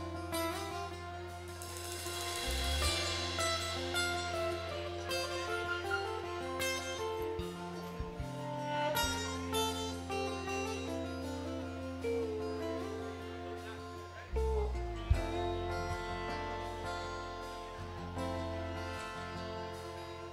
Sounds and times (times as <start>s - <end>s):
Music: 0.0s - 20.3s
Speech: 12.1s - 18.5s.